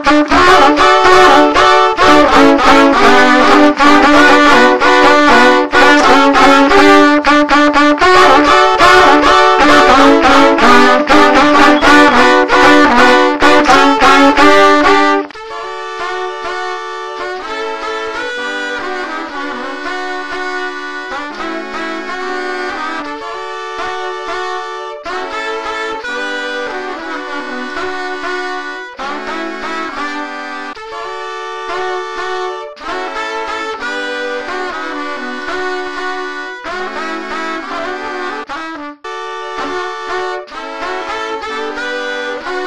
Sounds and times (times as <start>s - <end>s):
Trumpet: 0.0s - 42.6s.